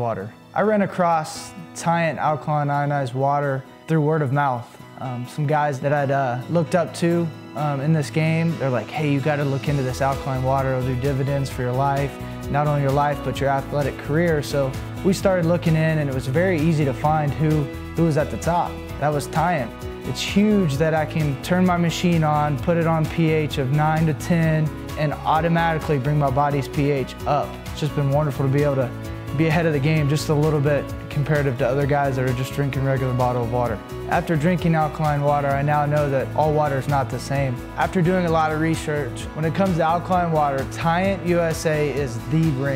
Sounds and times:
Music: 0.0 - 42.7
Speech: 0.0 - 42.7.

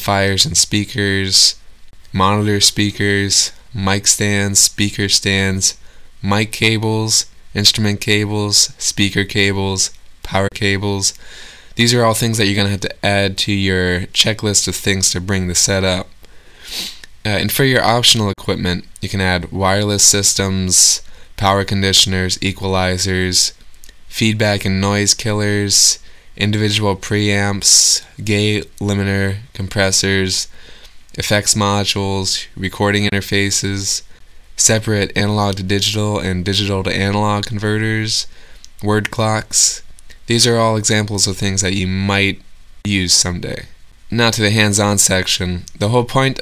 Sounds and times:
Speech: 0.0 - 11.2, 11.8 - 16.2, 17.2 - 30.5, 31.1 - 46.4.

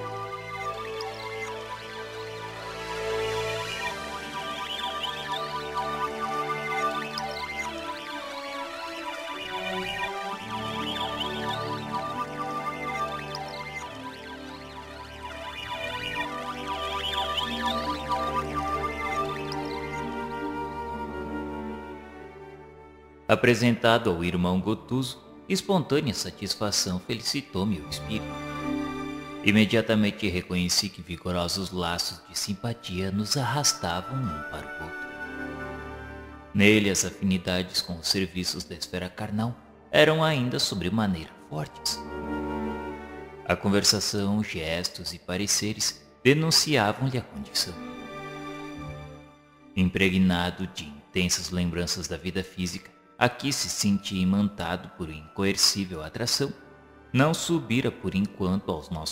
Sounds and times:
Music: 0.0 - 59.1
Speech: 23.3 - 28.3, 29.5 - 35.0, 36.6 - 42.0, 43.5 - 47.8, 49.8 - 56.6, 57.2 - 59.1.

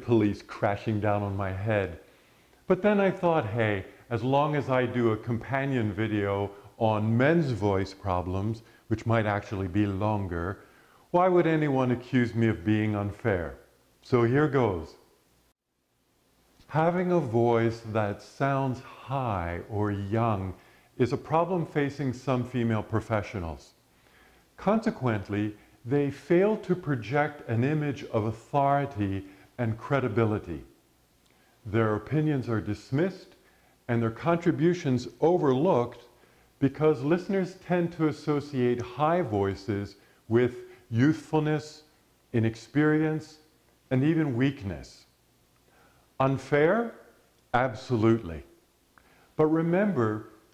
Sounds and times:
Male speech, man speaking: 0.0 - 2.0, 2.7 - 15.0, 16.7 - 23.8, 24.6 - 30.7, 31.7 - 45.1, 46.2 - 48.5, 49.4 - 50.4
Narration, monologue: 0.0 - 50.5.

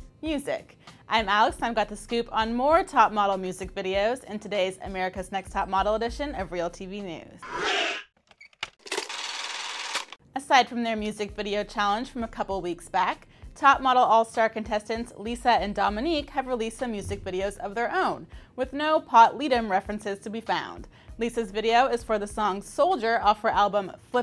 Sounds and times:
Speech: 0.2 - 7.4, 10.4 - 24.2.

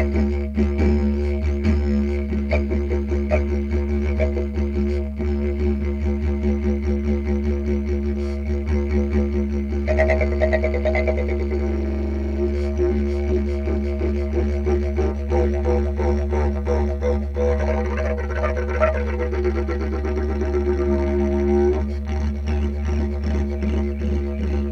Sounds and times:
Didgeridoo: 0.0 - 24.7.

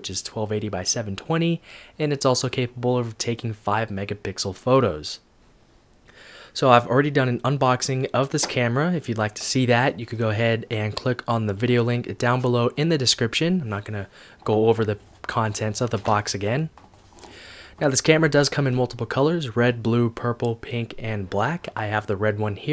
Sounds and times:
Speech: 0.0 - 5.2, 6.6 - 16.7, 17.8 - 22.7.

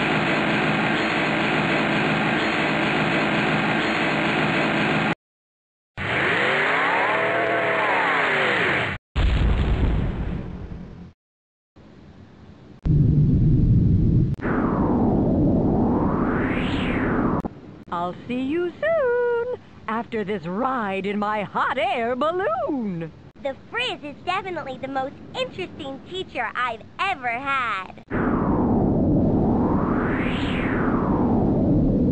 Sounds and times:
Speech: 17.9 - 28.0.

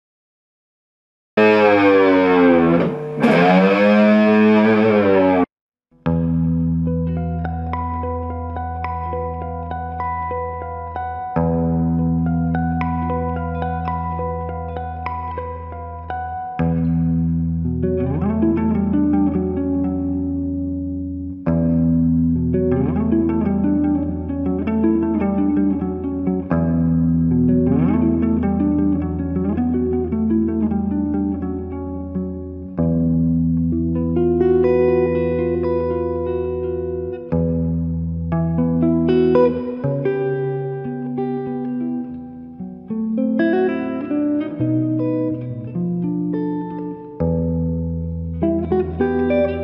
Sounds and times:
Electric guitar: 1.4 - 49.6.

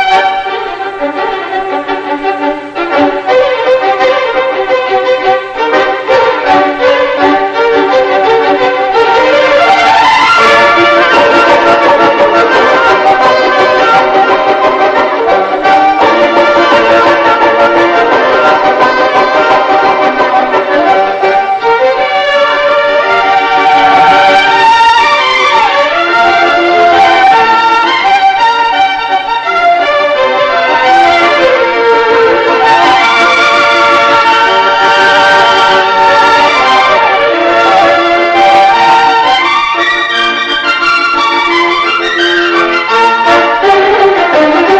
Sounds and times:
Violin, fiddle: 0.0 - 44.7.

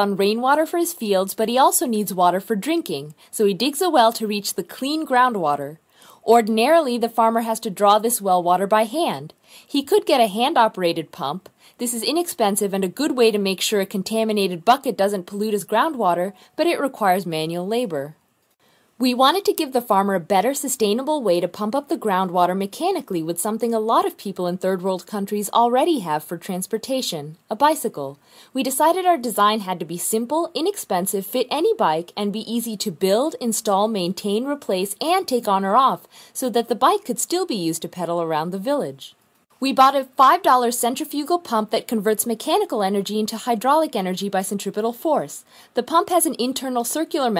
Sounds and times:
Speech: 0.0 - 18.2, 19.0 - 47.4.

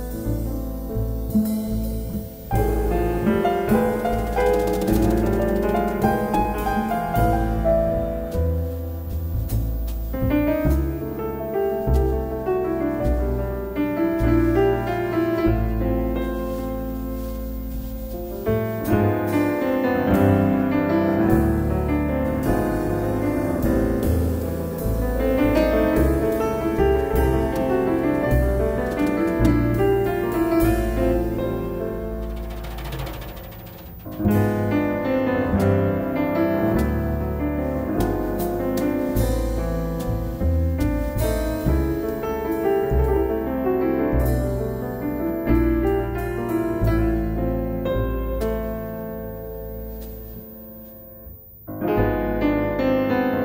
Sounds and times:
Music: 0.0 - 53.4.

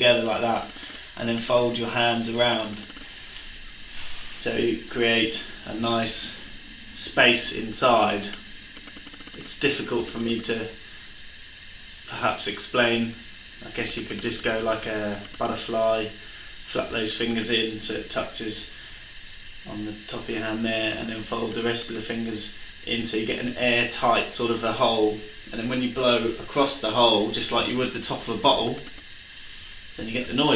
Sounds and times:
Speech: 0.0 - 2.9, 4.4 - 6.4, 7.0 - 8.4, 9.4 - 10.8, 12.1 - 18.7, 19.7 - 28.9, 30.0 - 30.5.

